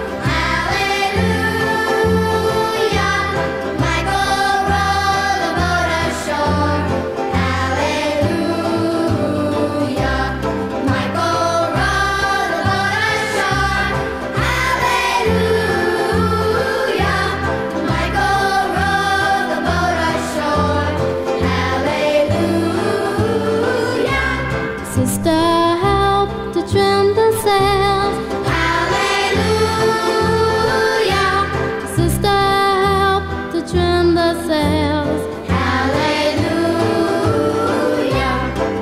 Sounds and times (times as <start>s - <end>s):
Music: 0.0s - 38.8s.